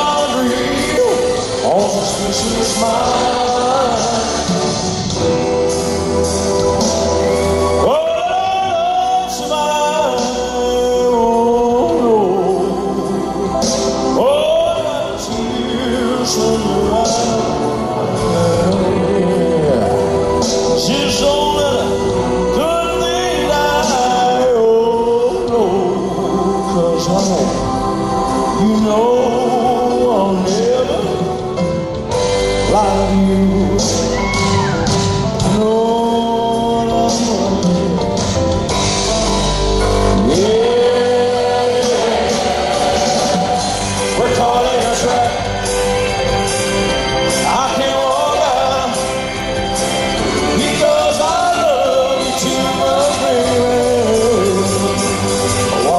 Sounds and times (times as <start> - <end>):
Singing: 0.0 - 38.5, 40.0 - 55.9
Vocal music: 0.0 - 55.9.